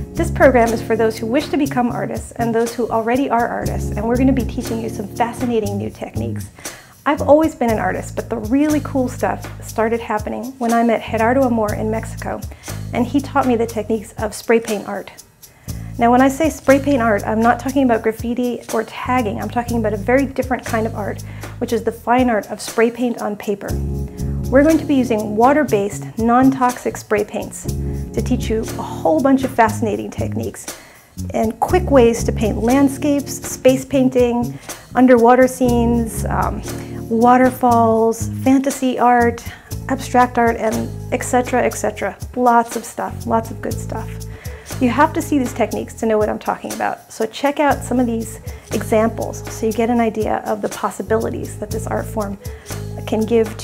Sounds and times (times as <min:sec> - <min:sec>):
Music: 0:00.0 - 0:53.6
Speech: 0:00.2 - 0:15.2, 0:16.0 - 0:23.8, 0:24.5 - 0:30.7, 0:31.3 - 0:52.4, 0:53.0 - 0:53.6.